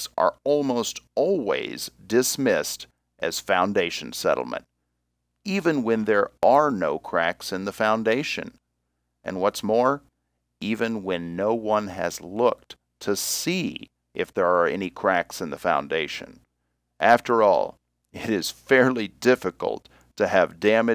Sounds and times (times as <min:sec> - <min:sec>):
Speech: 0:00.0 - 0:04.7, 0:05.5 - 0:08.6, 0:09.3 - 0:16.4, 0:17.0 - 0:20.9.